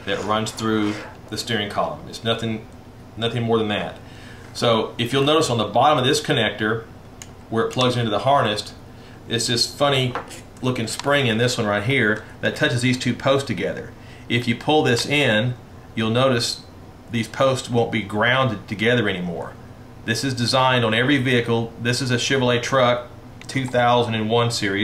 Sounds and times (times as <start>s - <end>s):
Speech: 0.0s - 4.0s, 4.6s - 6.9s, 7.5s - 24.8s.